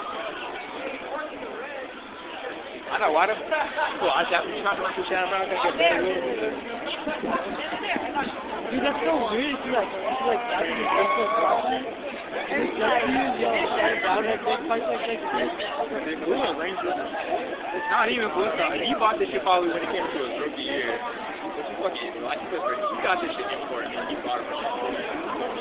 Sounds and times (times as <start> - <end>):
Speech: 0.0 - 25.6.